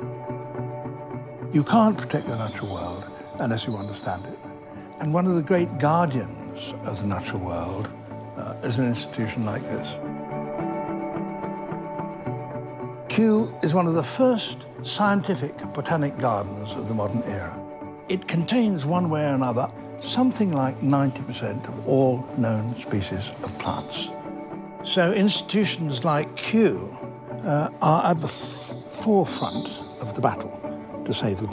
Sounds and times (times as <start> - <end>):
Music: 0.0 - 31.5
Speech: 1.6 - 4.4, 5.0 - 10.0, 13.1 - 24.2, 24.8 - 31.5.